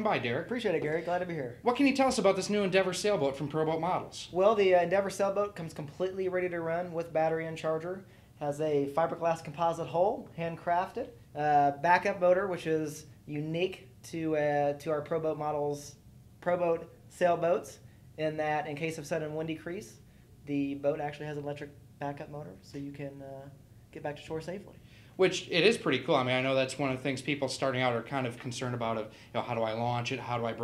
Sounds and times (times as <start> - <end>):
Speech: 0.0 - 30.6.